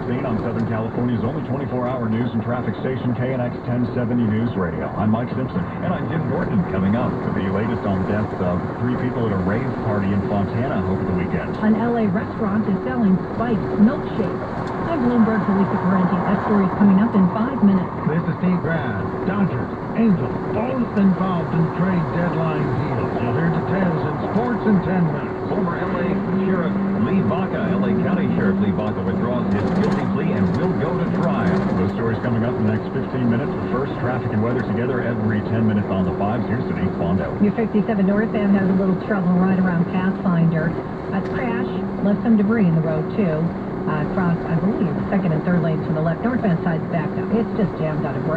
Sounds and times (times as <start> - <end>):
Speech: 0.0 - 48.3
Vehicle: 0.0 - 48.3.